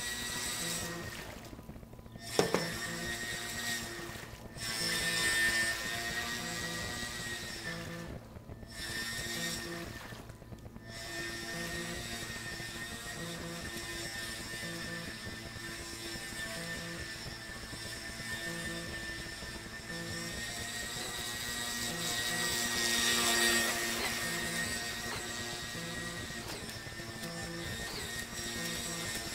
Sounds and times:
Motorboat, speedboat: 0.0s - 29.3s.

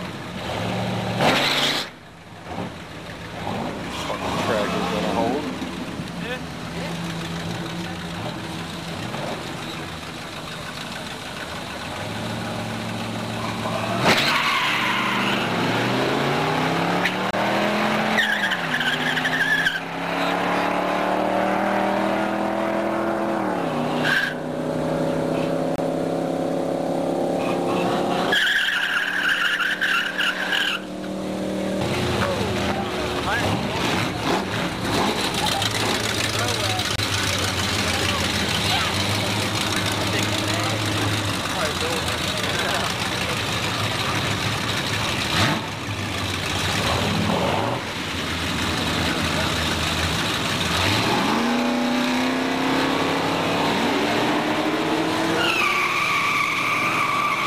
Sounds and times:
Skidding: 0.0s - 57.4s
Tire squeal: 1.3s - 2.0s, 13.3s - 15.8s, 18.1s - 20.4s, 23.6s - 24.6s, 27.4s - 31.1s, 55.2s - 57.4s.

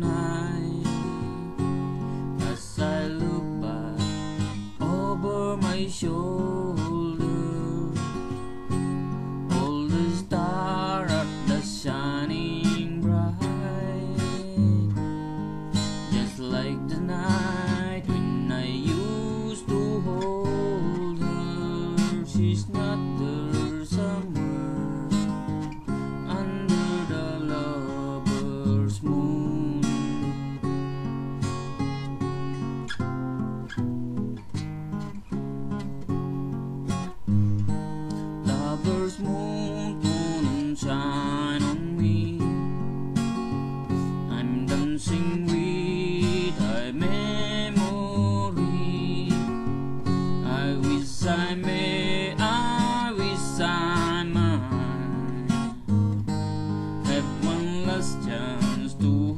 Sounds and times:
Acoustic guitar: 0.0s - 59.3s.

